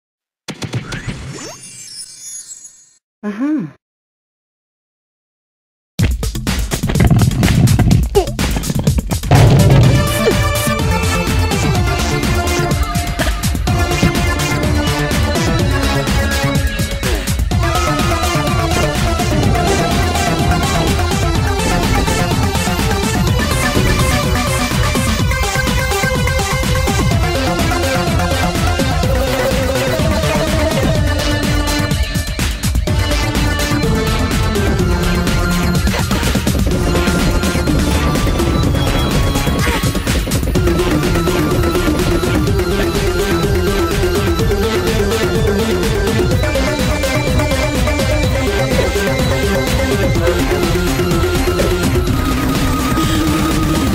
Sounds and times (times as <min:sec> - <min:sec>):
Speech: 0:03.2 - 0:03.8, 0:10.0 - 0:10.8
Music: 0:06.0 - 0:53.9.